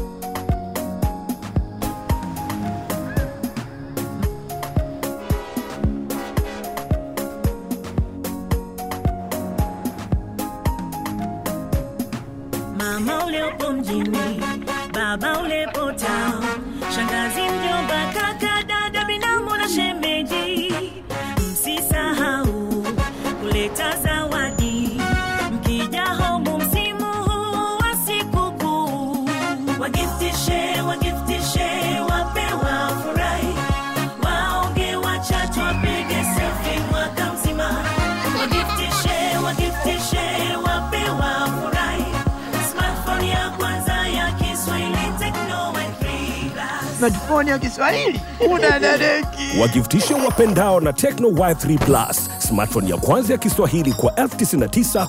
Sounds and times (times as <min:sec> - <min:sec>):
Techno: 0:30.0 - 0:55.0.